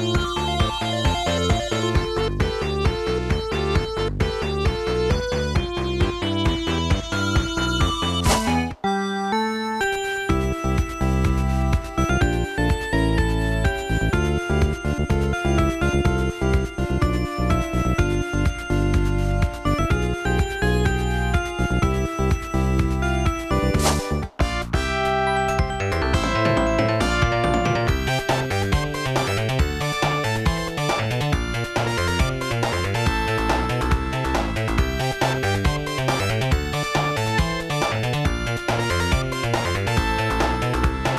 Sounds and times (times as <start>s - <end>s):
Music: 0.0s - 41.1s.